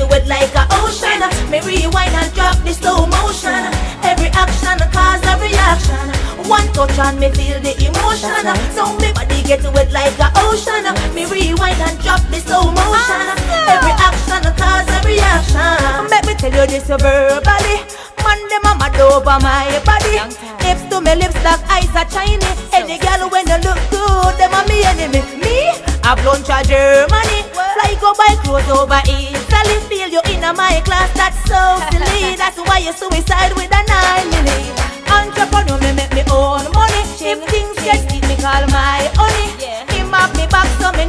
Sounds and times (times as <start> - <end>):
Music of Africa: 0.0 - 41.0.